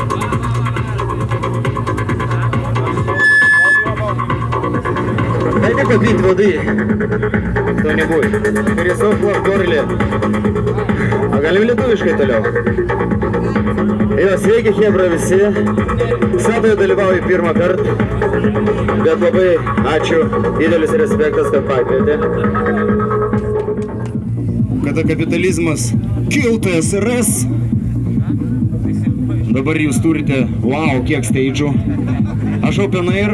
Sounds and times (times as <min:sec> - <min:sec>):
Music: 0:00.0 - 0:33.3
Speech: 0:05.5 - 0:06.7, 0:11.3 - 0:12.5, 0:19.0 - 0:22.4, 0:28.2 - 0:31.9, 0:32.6 - 0:33.3.